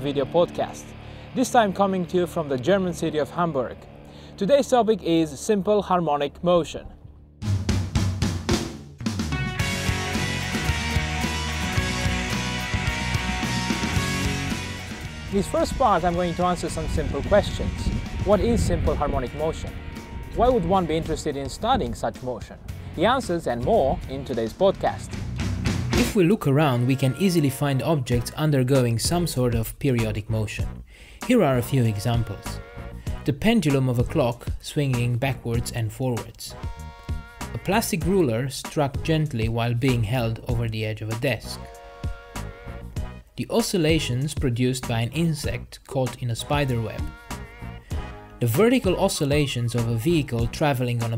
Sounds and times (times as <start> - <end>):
Speech: 0.0 - 3.8, 4.4 - 7.0, 15.3 - 19.8, 20.4 - 25.1, 26.0 - 32.6, 33.2 - 36.6, 37.6 - 41.6, 43.4 - 47.1, 48.4 - 51.1
Music: 0.0 - 51.1.